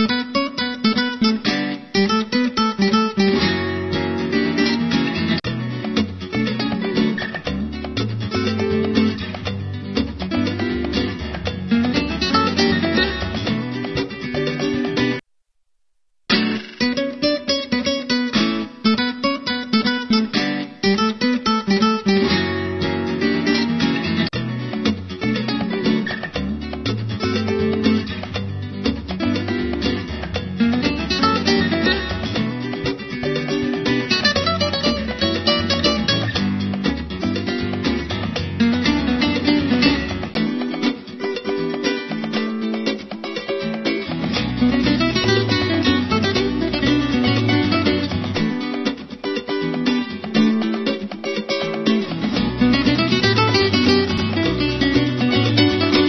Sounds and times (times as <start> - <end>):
Music: 0.0 - 15.2, 16.3 - 56.0.